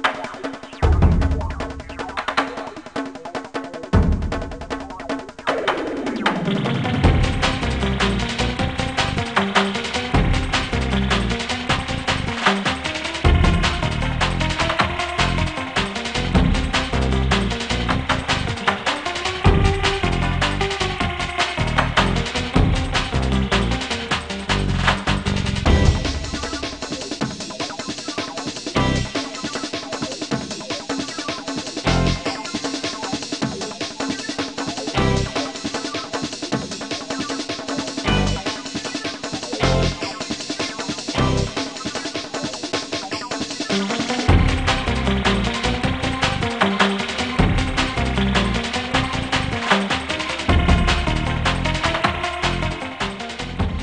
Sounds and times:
Music: 0:00.0 - 0:53.8.

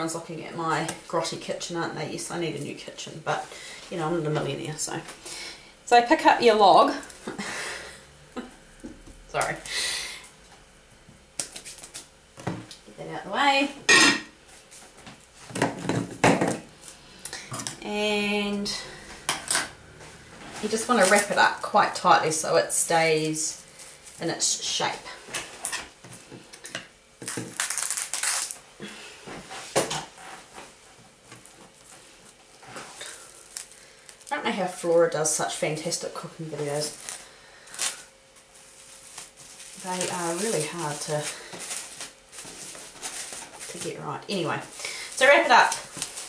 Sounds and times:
Speech: 0:00.0 - 0:05.1, 0:05.9 - 0:07.1, 0:09.3 - 0:09.6, 0:12.9 - 0:13.8, 0:17.8 - 0:18.8, 0:20.6 - 0:23.6, 0:24.2 - 0:25.2, 0:34.3 - 0:37.0, 0:39.8 - 0:41.4, 0:43.7 - 0:45.8.

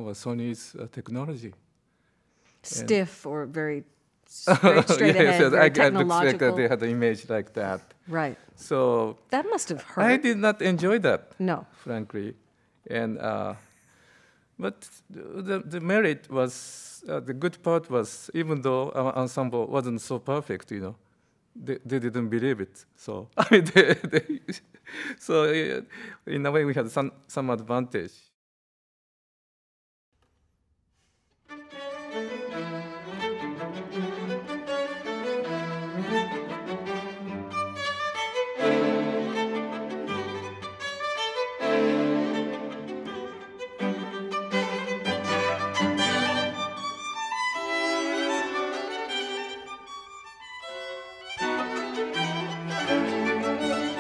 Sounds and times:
Speech: 0:00.0 - 0:01.6, 0:02.7 - 0:13.6, 0:14.6 - 0:21.0, 0:21.6 - 0:23.4, 0:25.2 - 0:28.3.

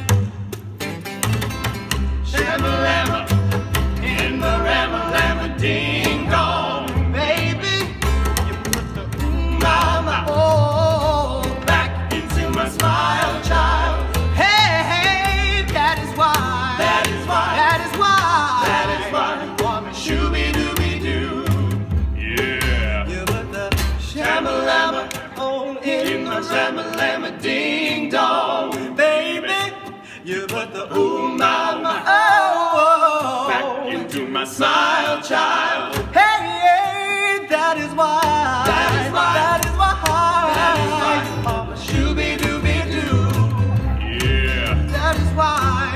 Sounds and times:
Inside, large room or hall: 0:00.0 - 0:45.9
Music: 0:00.0 - 0:45.9
Singing: 0:09.2 - 0:45.9.

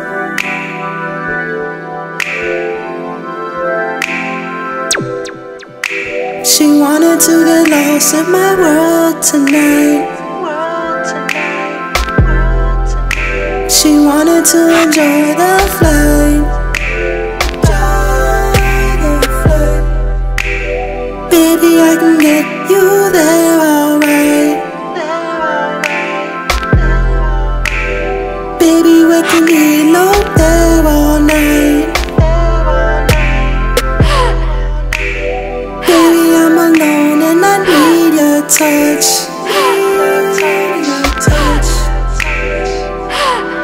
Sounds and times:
Music: 0:00.0 - 0:43.6.

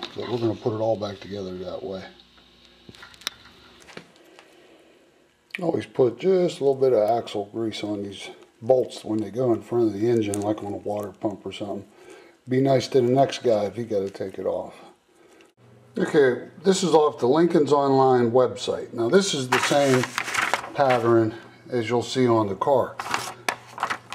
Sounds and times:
Speech: 0:00.0 - 0:02.2, 0:05.5 - 0:11.9, 0:12.5 - 0:15.0, 0:16.0 - 0:20.1, 0:20.7 - 0:23.0.

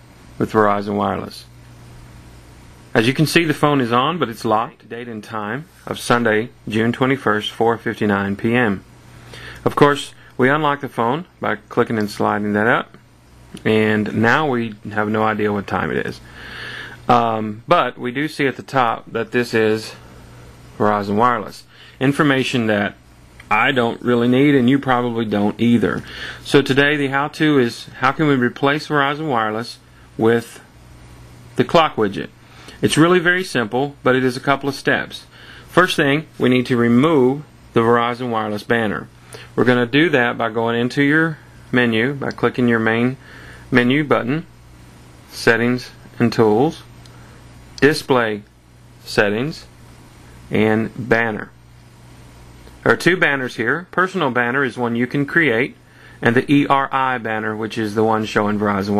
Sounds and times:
Speech: 0:00.4 - 0:01.6, 0:02.9 - 0:08.9, 0:09.6 - 0:16.3, 0:17.1 - 0:20.0, 0:20.8 - 0:30.7, 0:31.6 - 0:44.5, 0:45.3 - 0:46.9, 0:47.8 - 0:49.7, 0:50.5 - 0:51.6, 0:52.8 - 0:58.9.

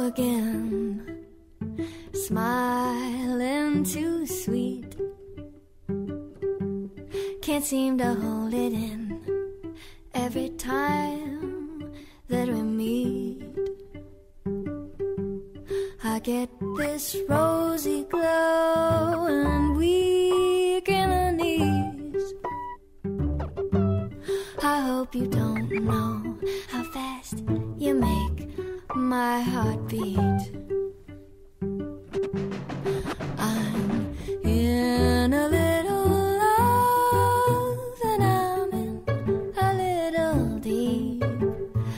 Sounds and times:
Music: 0:00.0 - 0:41.9.

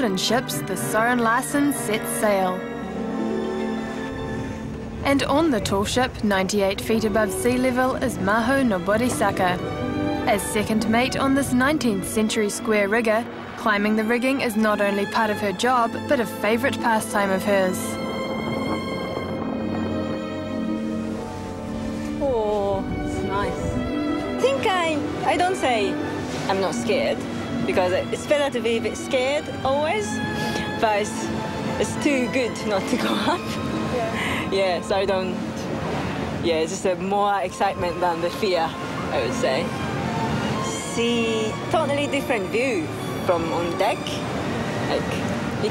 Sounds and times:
Music: 0:00.0 - 0:45.7.

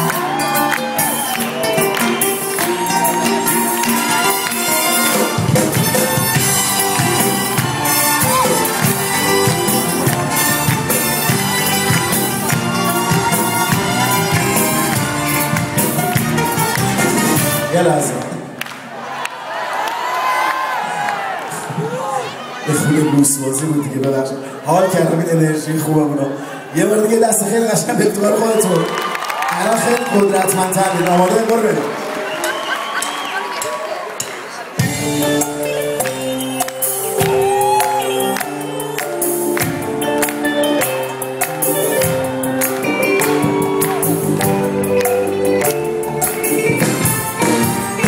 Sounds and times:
Jazz: 0:00.1 - 0:17.7, 0:34.8 - 0:48.0.

